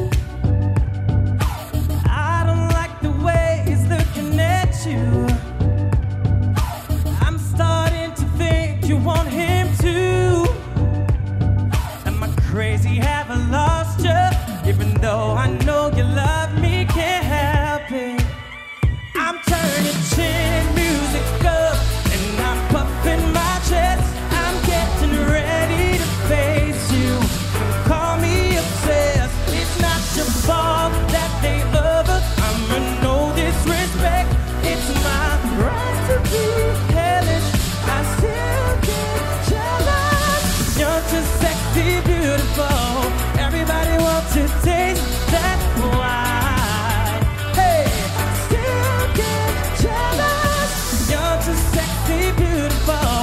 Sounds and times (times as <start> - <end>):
Rhythm and blues: 0.0 - 53.2.